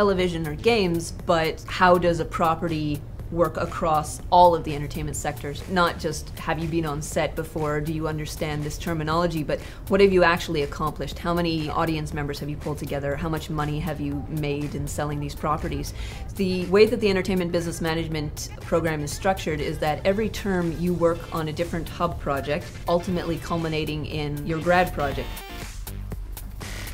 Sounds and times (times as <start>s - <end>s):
Speech: 0.0s - 25.4s
Music: 0.0s - 26.9s.